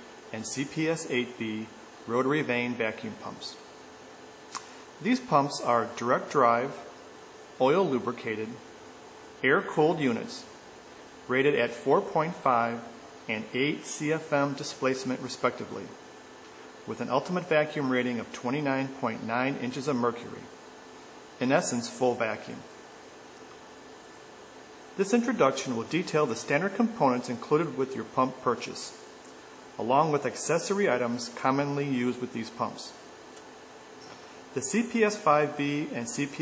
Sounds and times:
Speech: 0.3 - 3.7, 5.0 - 7.0, 7.6 - 8.7, 9.4 - 10.6, 11.3 - 16.0, 16.9 - 20.6, 21.4 - 22.8, 25.0 - 29.0, 29.8 - 33.0, 34.6 - 36.4.

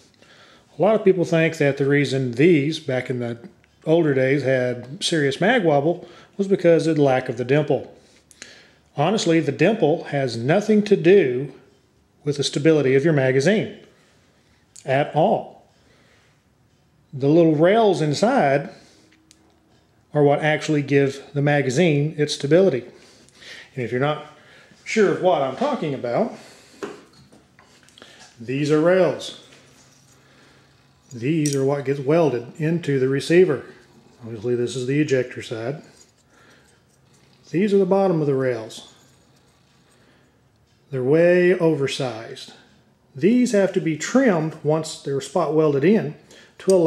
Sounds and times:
Speech: 0.7 - 8.0, 9.0 - 13.8, 14.8 - 15.7, 17.1 - 18.8, 20.1 - 23.0, 23.7 - 26.4, 28.4 - 29.5, 31.1 - 35.9, 37.5 - 39.0, 40.9 - 42.6, 43.2 - 46.8.

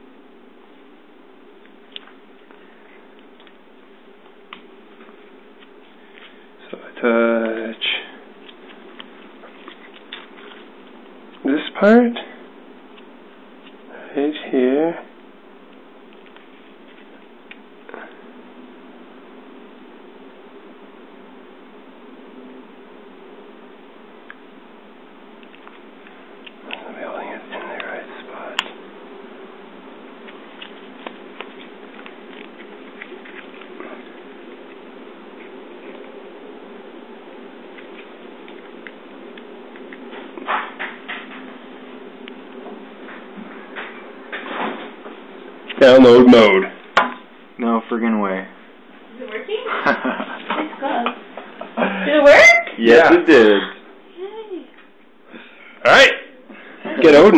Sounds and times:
Inside, small room: 0.0 - 57.3.

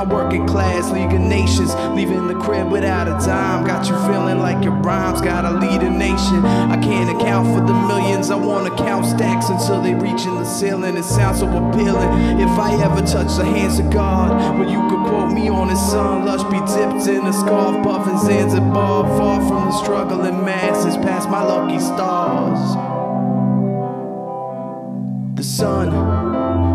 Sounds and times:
Music: 0.0 - 26.7.

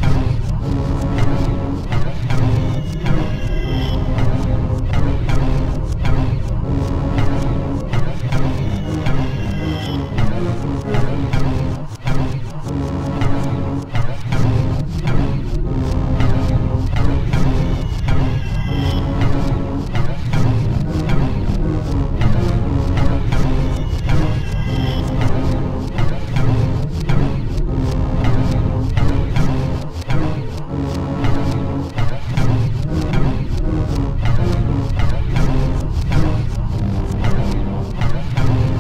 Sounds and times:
Soundtrack music: 0.0 - 38.8.

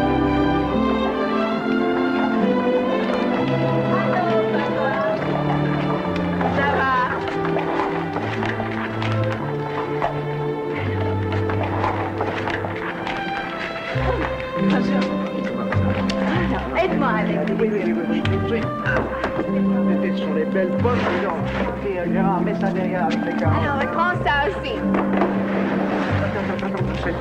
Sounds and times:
Music: 0.0 - 27.2
Speech: 19.8 - 24.9, 26.2 - 27.2.

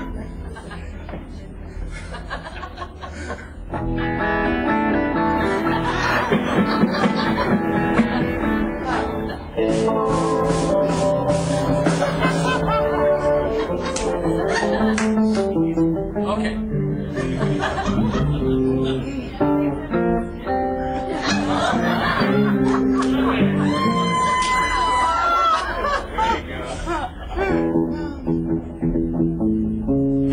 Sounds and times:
Electric guitar: 3.7 - 25.8, 27.3 - 30.3.

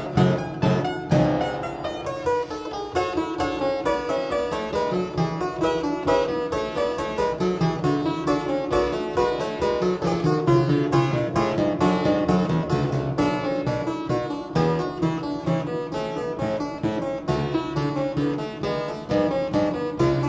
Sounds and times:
Piano: 0.0 - 20.2.

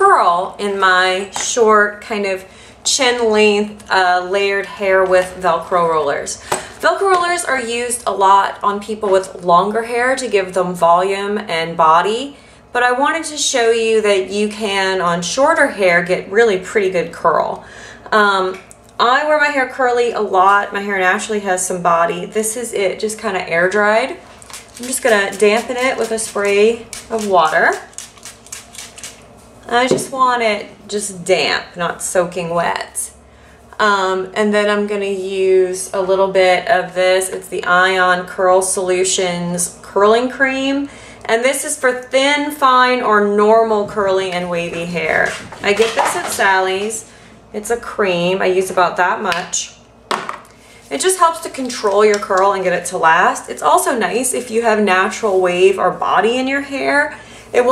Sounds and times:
Speech: 0.0 - 24.2, 24.8 - 27.9, 29.7 - 33.2, 33.8 - 49.8, 50.9 - 57.7.

